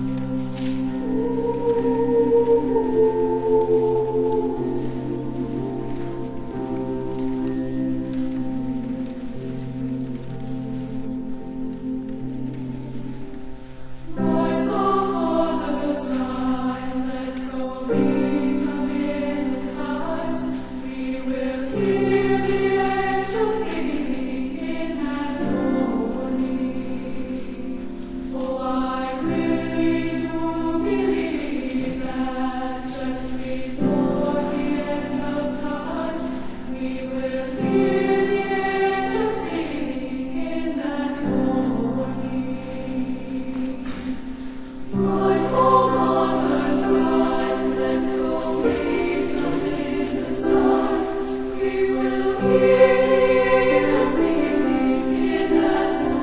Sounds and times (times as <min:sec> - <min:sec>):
Choir: 0:00.0 - 0:56.2.